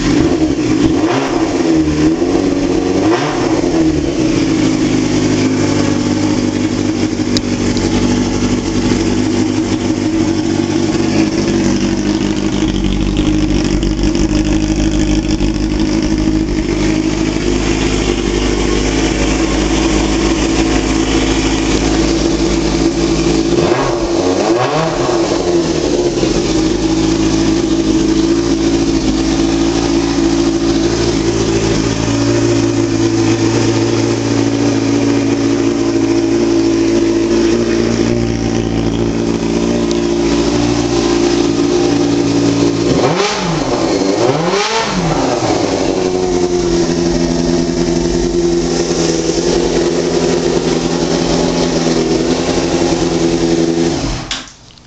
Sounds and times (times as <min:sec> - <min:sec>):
Motorcycle: 0:00.0 - 0:54.8.